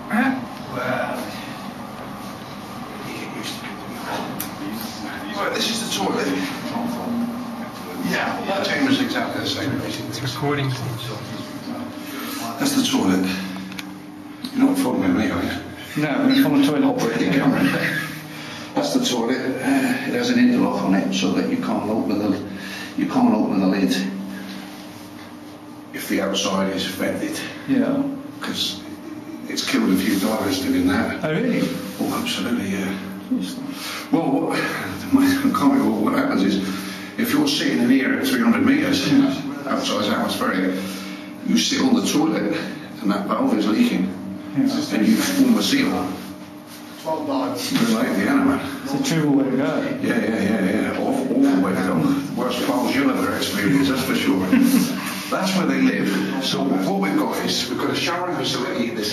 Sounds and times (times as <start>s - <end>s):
Speech: 0.0s - 1.5s, 2.9s - 13.7s, 14.4s - 24.3s, 25.9s - 46.3s, 47.0s - 59.1s.